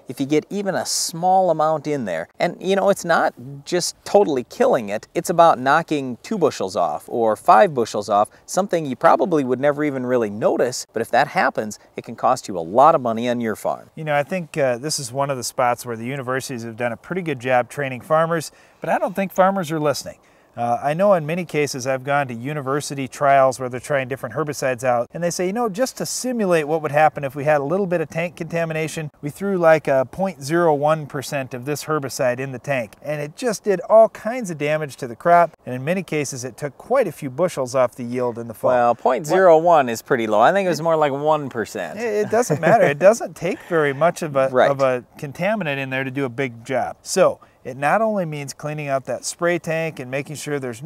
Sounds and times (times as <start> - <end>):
Speech: 0.0 - 50.8.